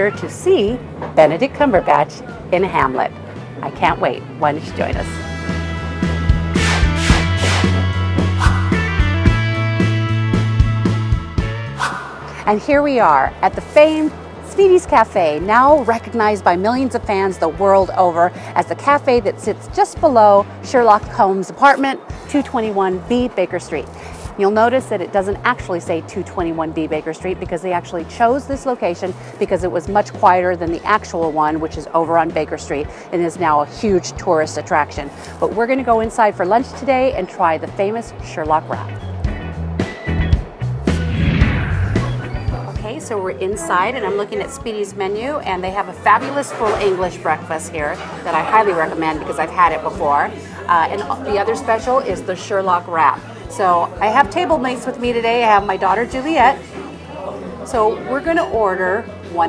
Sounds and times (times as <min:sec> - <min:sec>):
Speech: 0:00.0 - 0:05.1, 0:12.4 - 0:39.0, 0:42.8 - 0:56.6, 0:57.2 - 0:59.4
Music: 0:00.0 - 0:59.4.